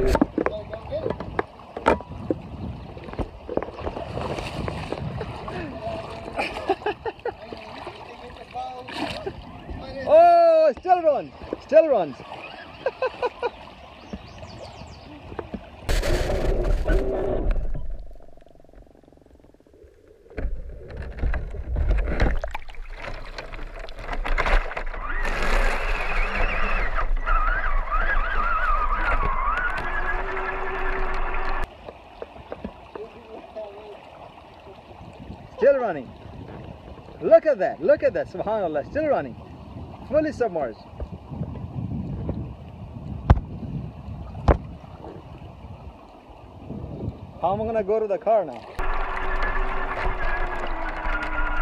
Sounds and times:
Trickle, dribble: 0:00.3 - 0:12.4, 0:22.2 - 0:24.2, 0:31.6 - 0:37.8.

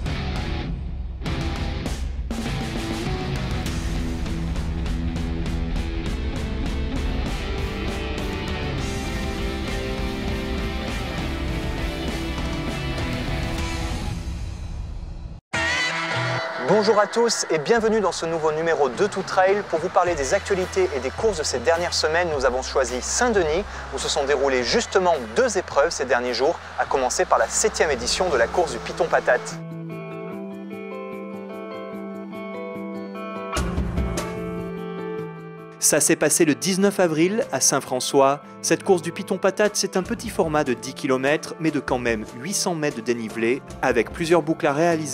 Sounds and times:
Music: 0:00.0 - 0:45.1
Speech: 0:15.6 - 0:29.6, 0:35.8 - 0:45.1.

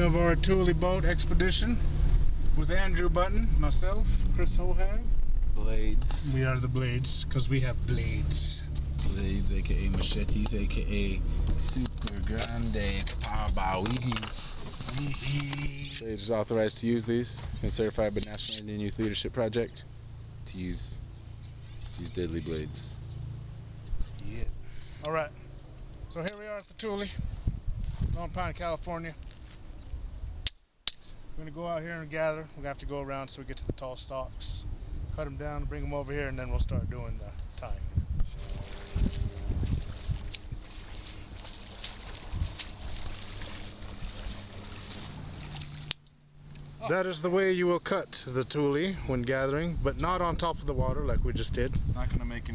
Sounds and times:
Speech: 0:00.0 - 0:01.8, 0:02.6 - 0:21.0, 0:22.0 - 0:23.0, 0:26.1 - 0:27.3, 0:28.1 - 0:29.2, 0:31.4 - 0:37.9, 0:46.8 - 0:52.5.

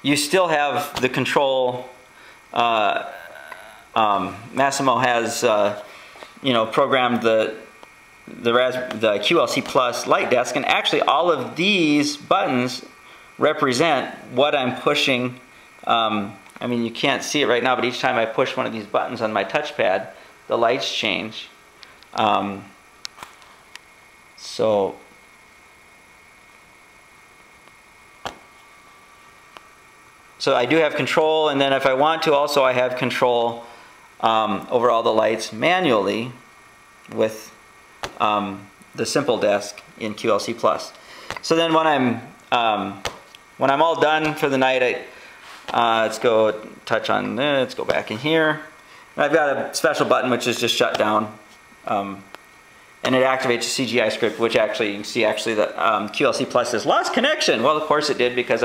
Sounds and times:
Speech: 0:00.0 - 0:07.7, 0:08.3 - 0:22.8, 0:24.4 - 0:25.1, 0:30.4 - 0:36.4, 0:37.1 - 0:37.6, 0:38.2 - 0:45.1, 0:45.7 - 0:52.3, 0:53.0 - 0:58.6.

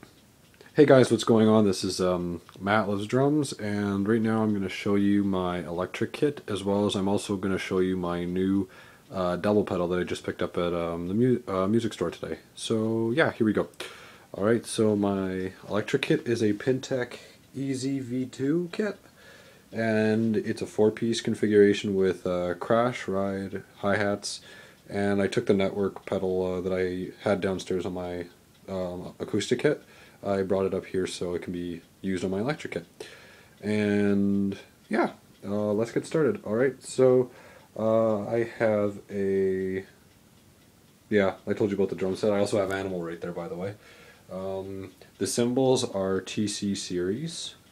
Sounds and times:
Speech: 0:00.7 - 0:19.1, 0:19.7 - 0:33.0, 0:33.6 - 0:40.0, 0:41.1 - 0:47.7.

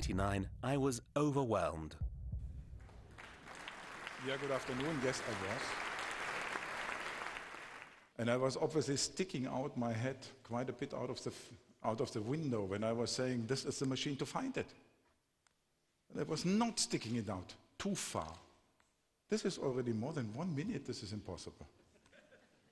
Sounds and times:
Speech: 0:00.0 - 0:02.0, 0:04.2 - 0:05.7, 0:08.2 - 0:14.8, 0:16.1 - 0:18.5, 0:19.3 - 0:21.8.

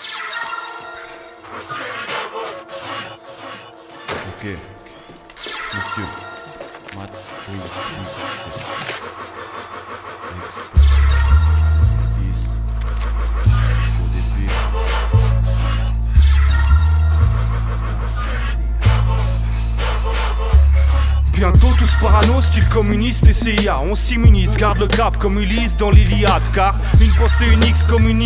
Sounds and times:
Music: 0:00.6 - 0:28.2.

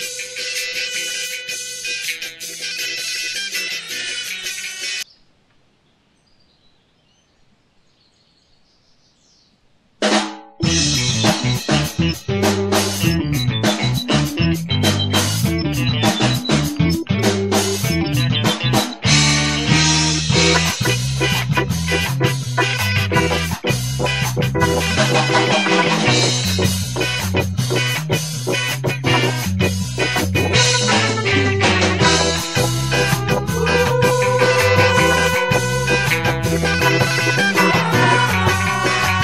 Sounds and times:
Blues: 0:00.0 - 0:05.0, 0:10.0 - 0:39.2.

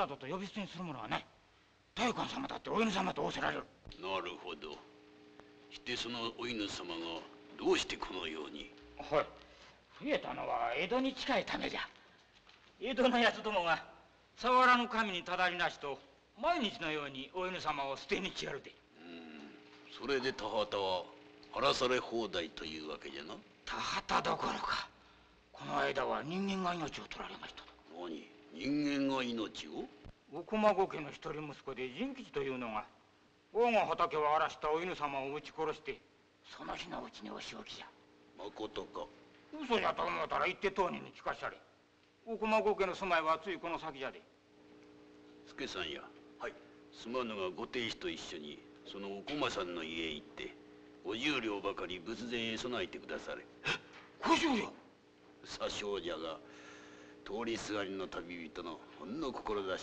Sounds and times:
Speech: 0:00.0 - 0:01.4, 0:02.0 - 0:04.9, 0:05.7 - 0:09.4, 0:10.0 - 0:12.0, 0:12.8 - 0:25.0, 0:25.6 - 0:41.7, 0:42.3 - 0:44.3, 0:45.5 - 0:53.5, 0:54.2 - 0:54.8, 0:55.4 - 0:56.4, 0:57.3 - 0:59.8.

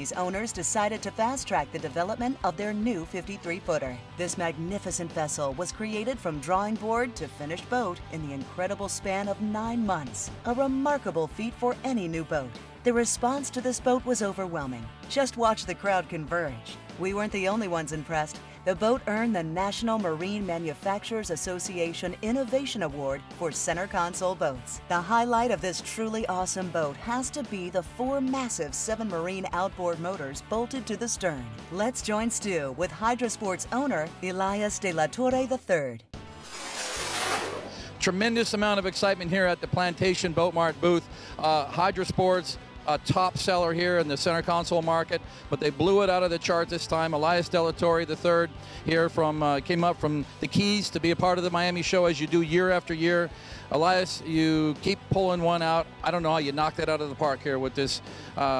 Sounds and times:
Speech: 0:00.0 - 0:36.1, 0:38.0 - 0:58.5
Music: 0:00.0 - 0:58.5.

